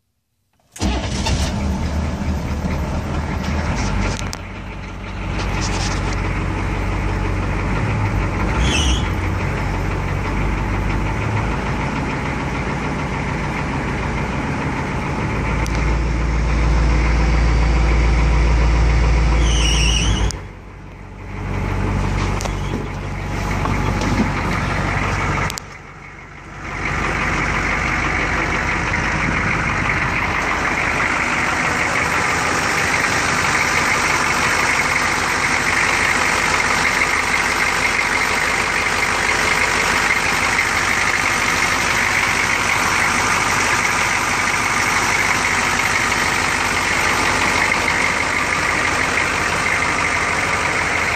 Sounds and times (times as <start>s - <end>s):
Truck: 0.6s - 51.1s.